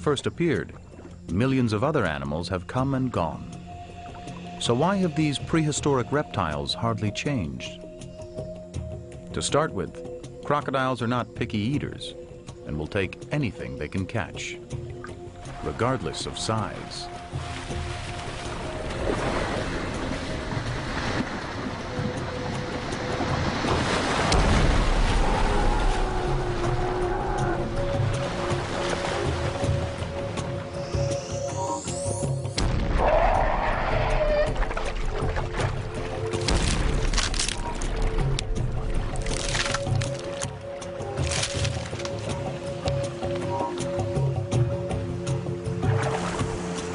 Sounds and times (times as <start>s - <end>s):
Music: 0.0s - 46.9s
Animal: 33.0s - 34.8s.